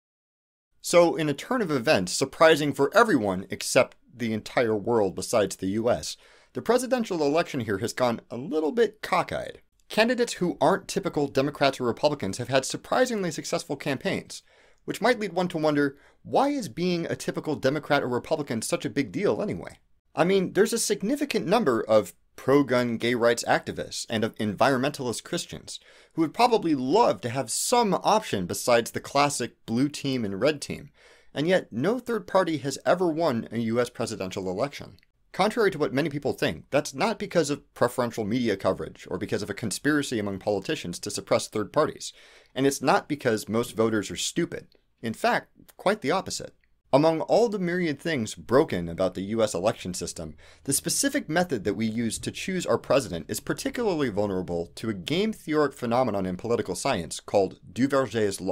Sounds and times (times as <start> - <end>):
Speech: 0.8 - 58.5.